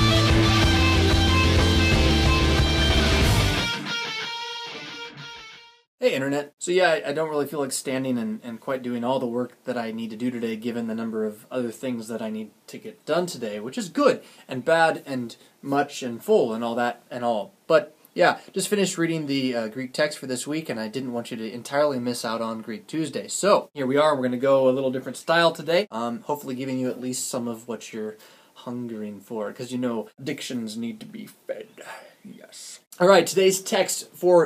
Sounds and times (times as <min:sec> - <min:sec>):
Speech: 0:06.0 - 0:34.4.